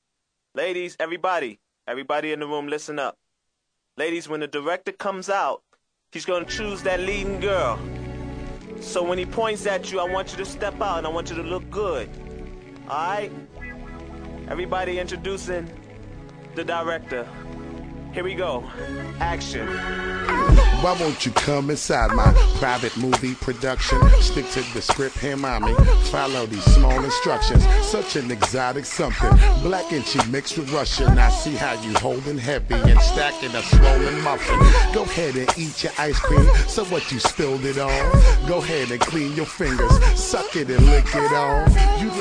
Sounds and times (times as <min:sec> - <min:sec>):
Music: 0:06.2 - 0:42.2.